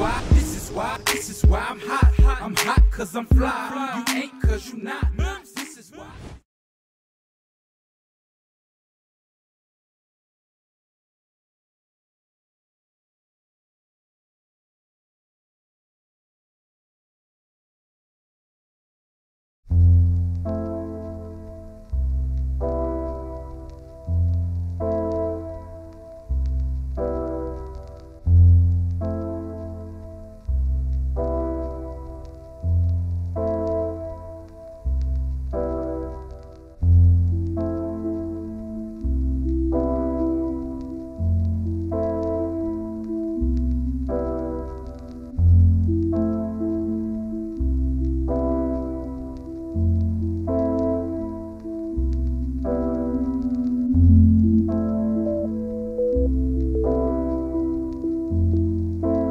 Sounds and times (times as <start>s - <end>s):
Music: 0.0s - 6.2s, 19.7s - 59.3s.